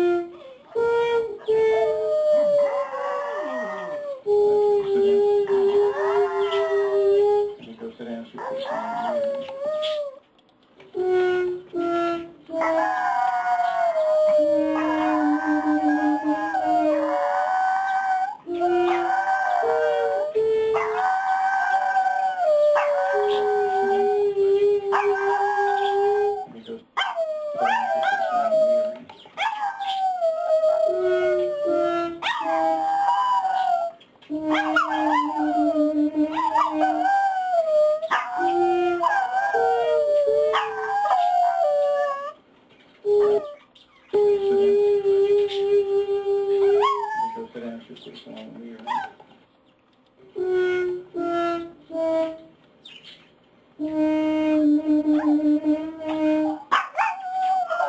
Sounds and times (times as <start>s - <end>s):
Speech: 3.2s - 9.6s, 23.4s - 26.9s, 44.2s - 49.1s
Yip: 27.0s - 28.5s, 29.4s - 30.0s, 32.2s - 32.6s, 34.5s - 35.4s, 36.3s - 37.2s, 38.0s - 39.6s, 40.5s - 41.6s, 46.8s - 47.4s, 48.8s - 49.2s, 55.2s - 55.4s, 56.5s - 57.8s.